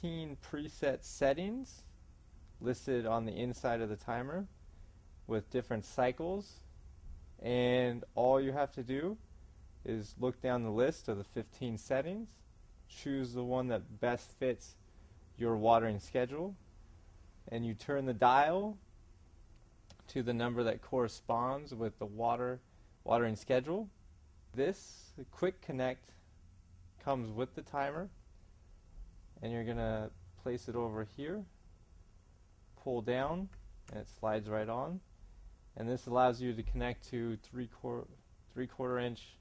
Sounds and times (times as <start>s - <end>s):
Speech: 0.0s - 1.9s, 2.6s - 4.5s, 5.3s - 6.7s, 7.4s - 9.2s, 9.8s - 14.8s, 15.4s - 16.6s, 17.5s - 18.8s, 19.9s - 26.2s, 27.0s - 28.2s, 29.4s - 31.6s, 32.8s - 35.0s, 35.8s - 39.4s.